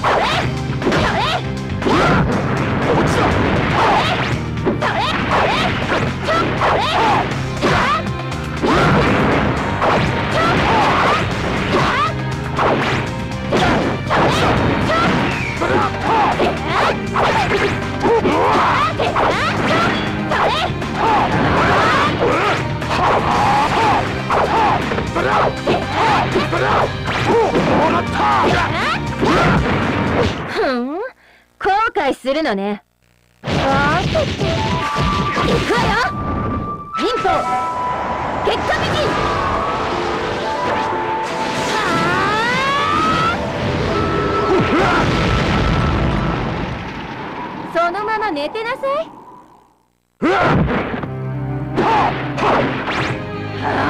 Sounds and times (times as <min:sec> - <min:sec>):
Music: 0:00.0 - 0:30.3, 0:33.8 - 0:46.4, 0:50.2 - 0:53.9
Speech: 0:27.8 - 0:29.0, 0:30.6 - 0:32.8, 0:33.6 - 0:34.2, 0:35.7 - 0:36.1, 0:38.5 - 0:39.2.